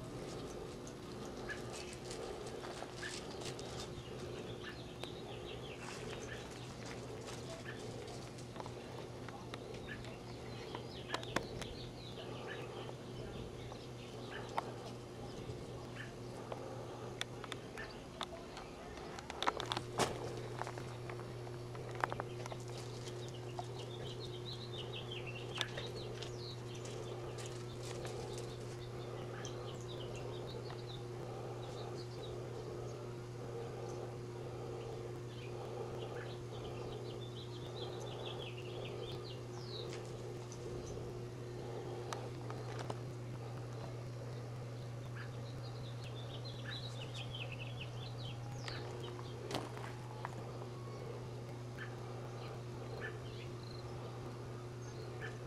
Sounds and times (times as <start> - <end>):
Animal: 0.0 - 13.3, 14.0 - 16.6, 48.5 - 55.4.